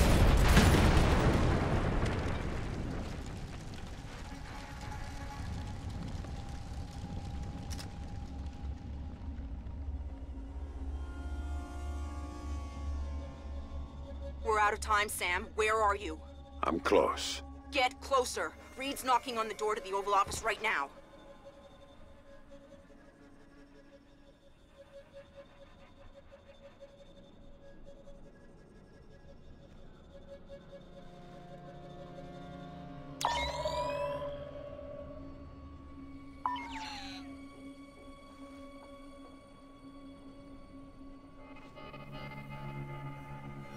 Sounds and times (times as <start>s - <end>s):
Speech: 14.5s - 20.9s.